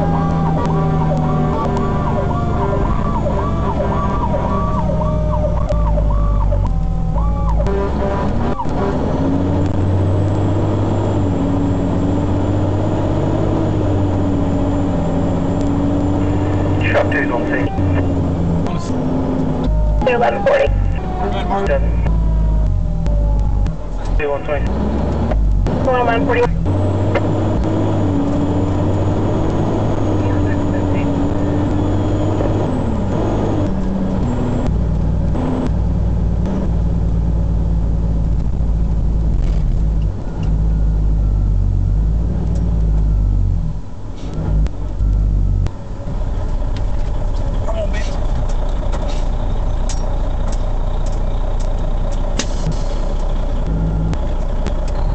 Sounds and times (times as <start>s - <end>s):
Car: 0.0s - 55.1s.